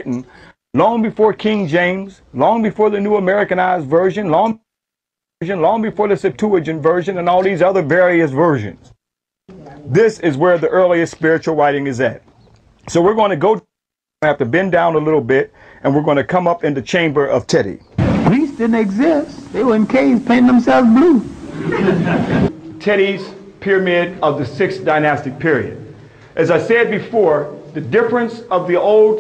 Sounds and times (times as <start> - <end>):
Speech: 0.0 - 4.6, 5.4 - 8.9, 9.5 - 12.2, 12.9 - 29.2.